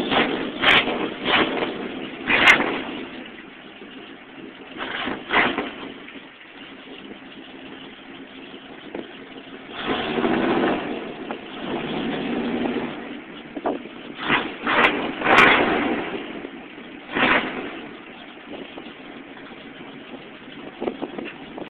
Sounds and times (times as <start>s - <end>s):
Vehicle: 0.0s - 21.6s.